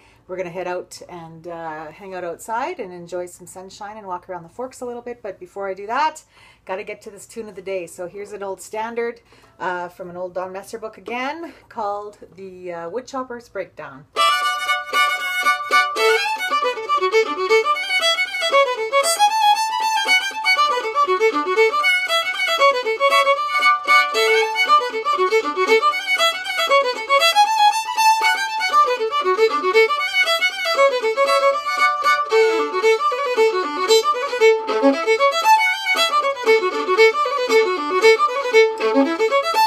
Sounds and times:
Violin, fiddle: 0:14.2 - 0:39.6.

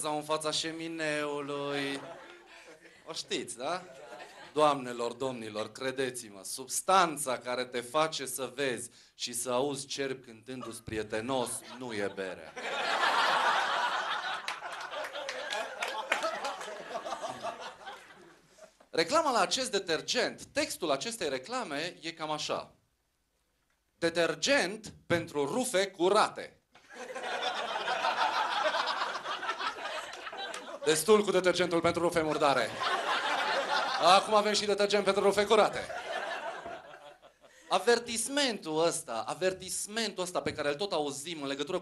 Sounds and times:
Speech: 0:00.0 - 0:02.2, 0:03.0 - 0:12.6, 0:18.9 - 0:22.8, 0:24.0 - 0:26.6, 0:30.8 - 0:32.8, 0:34.0 - 0:36.0, 0:37.7 - 0:41.8.

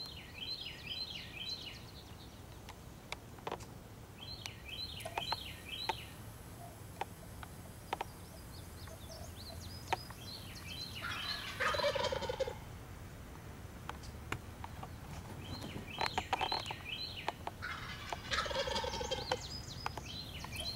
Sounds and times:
Chirp, tweet: 0:00.0 - 0:02.4, 0:04.2 - 0:06.2, 0:08.0 - 0:12.0, 0:15.4 - 0:17.4, 0:18.4 - 0:20.7
Gobble: 0:11.1 - 0:12.6, 0:17.6 - 0:19.4.

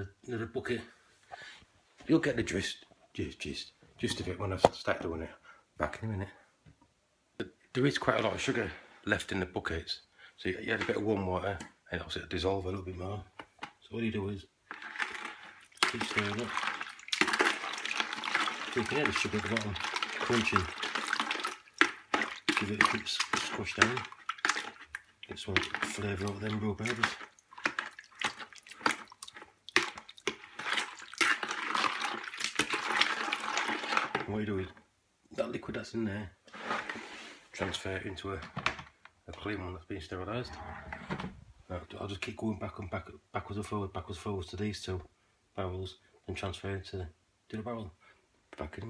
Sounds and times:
Speech: 0:00.0 - 0:01.0, 0:02.0 - 0:06.4, 0:07.4 - 0:14.5, 0:15.9 - 0:16.6, 0:18.8 - 0:20.7, 0:22.5 - 0:24.1, 0:25.3 - 0:27.2, 0:34.2 - 0:36.4, 0:37.6 - 0:38.5, 0:39.3 - 0:40.7, 0:41.7 - 0:48.0, 0:48.6 - 0:48.9
Inside, small room: 0:00.0 - 0:48.9.

